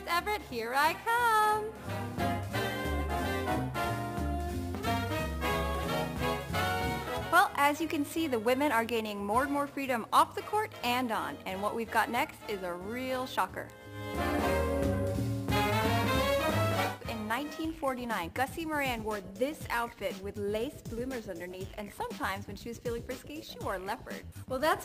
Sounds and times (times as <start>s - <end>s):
Jazz: 0.0s - 17.8s.